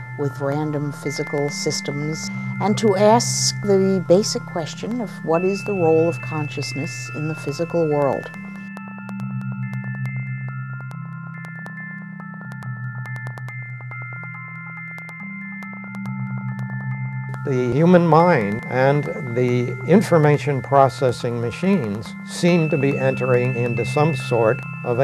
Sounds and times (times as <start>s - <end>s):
Music: 0.0s - 25.0s
Speech: 0.2s - 8.3s, 17.5s - 25.0s.